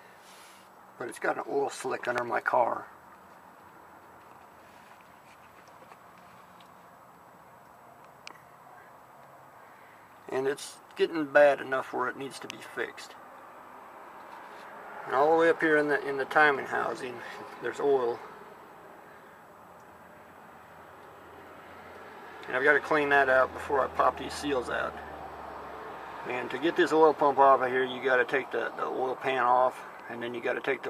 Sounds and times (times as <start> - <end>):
Speech: 1.0 - 2.9, 10.3 - 13.2, 15.1 - 18.2, 22.5 - 25.0, 26.3 - 30.8.